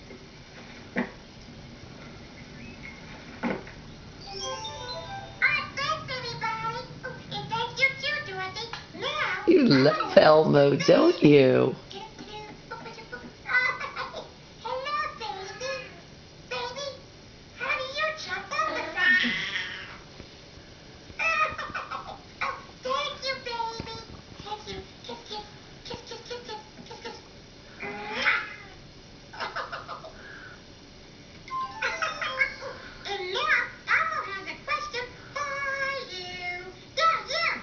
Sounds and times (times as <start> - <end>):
Inside, small room: 0.0 - 37.6
Television: 0.0 - 37.6
Caterwaul: 18.7 - 20.0, 27.8 - 28.7.